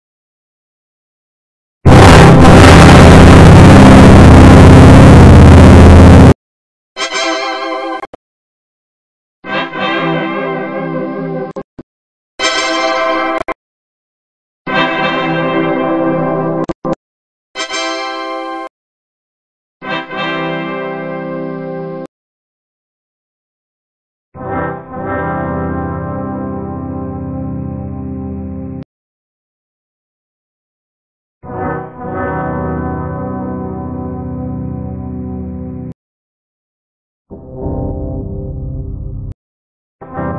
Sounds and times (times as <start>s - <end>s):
Music: 7.0s - 8.1s, 9.4s - 11.6s, 12.4s - 13.5s, 14.7s - 16.8s, 17.6s - 18.7s, 19.8s - 22.1s, 24.4s - 28.8s, 31.4s - 36.0s, 37.3s - 39.4s, 40.0s - 40.3s.